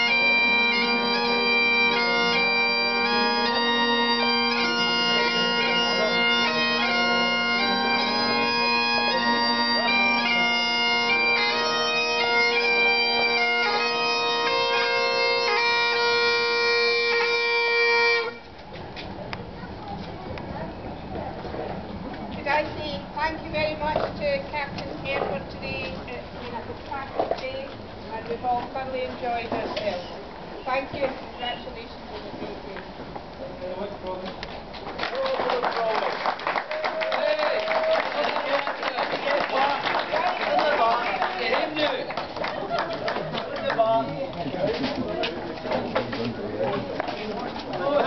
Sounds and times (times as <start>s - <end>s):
Bagpipes: 0.0s - 18.5s
Wind instrument, woodwind instrument: 0.0s - 18.6s.